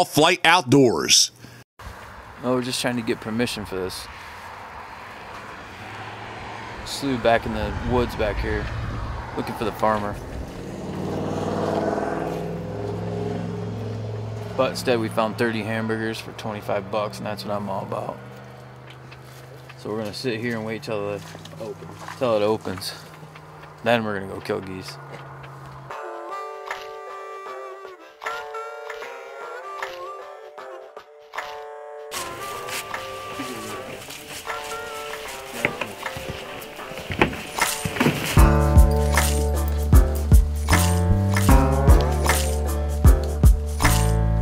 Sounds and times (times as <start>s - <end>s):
Speech: 0.0s - 1.4s, 2.4s - 4.1s, 6.8s - 8.7s, 9.4s - 10.2s, 14.6s - 18.2s, 19.8s - 23.0s, 23.8s - 25.0s
Outside, rural or natural: 0.0s - 44.4s.